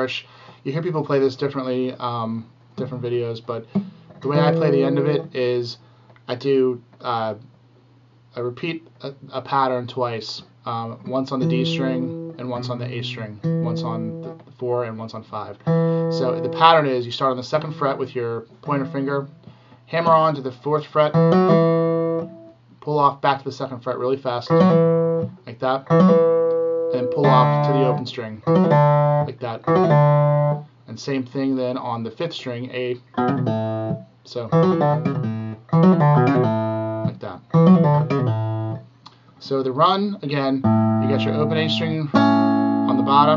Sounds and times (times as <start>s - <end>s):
Speech: 0.0s - 7.5s, 8.3s - 19.3s, 19.9s - 21.2s, 22.8s - 24.6s, 25.4s - 25.9s, 26.9s - 28.5s, 29.2s - 29.7s, 30.9s - 33.0s, 34.3s - 34.6s, 37.1s - 37.5s, 39.4s - 42.2s, 42.9s - 43.3s
Acoustic guitar: 2.8s - 5.4s, 11.4s - 14.5s, 15.6s - 16.8s, 21.1s - 22.5s, 24.5s - 30.7s, 33.1s - 39.3s, 40.6s - 43.3s
Electronic tuner: 2.8s - 5.4s, 11.1s - 14.6s, 15.6s - 16.9s, 17.5s - 20.2s, 21.1s - 22.6s, 24.5s - 30.8s, 33.1s - 39.3s, 40.4s - 43.3s.